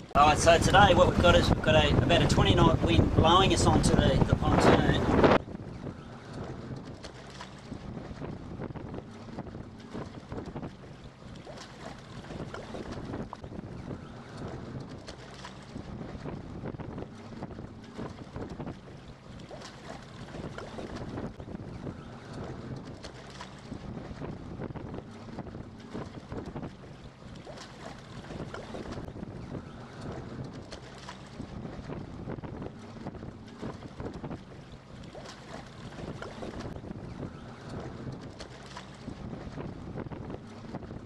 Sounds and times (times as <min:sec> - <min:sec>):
Boat, Water vehicle: 0:00.0 - 0:41.0.